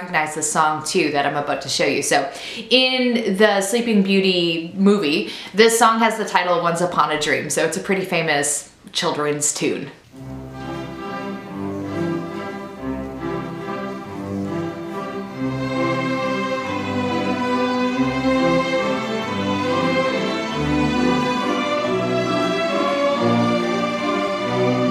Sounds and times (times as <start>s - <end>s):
Orchestra: 10.1s - 24.9s.